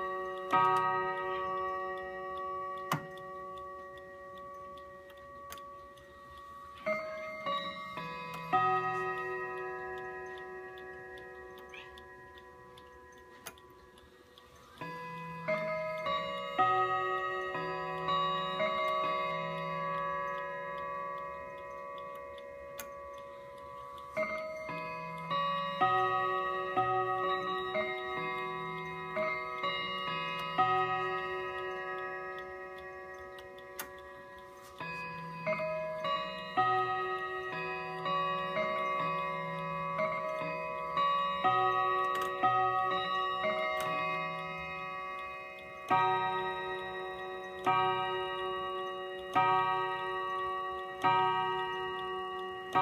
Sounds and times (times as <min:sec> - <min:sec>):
Clock: 0:00.0 - 0:52.8.